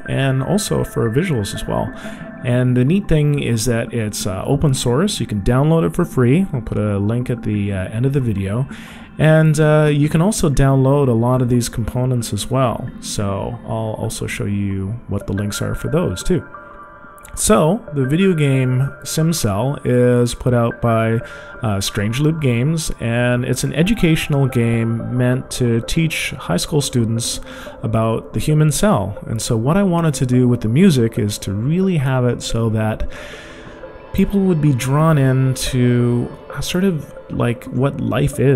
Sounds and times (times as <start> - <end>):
Speech: 0.0 - 16.5, 17.3 - 33.1, 34.1 - 38.5
Music: 0.0 - 38.5.